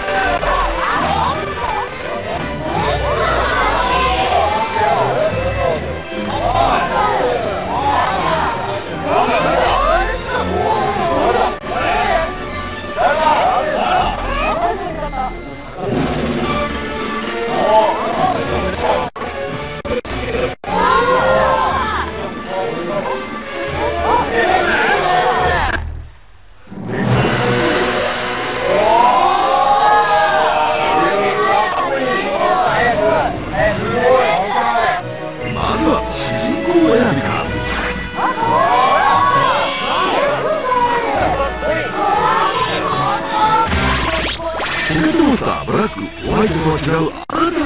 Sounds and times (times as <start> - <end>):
Music: 0.0 - 47.6
Speech: 2.6 - 12.3, 30.4 - 37.6, 44.3 - 47.6.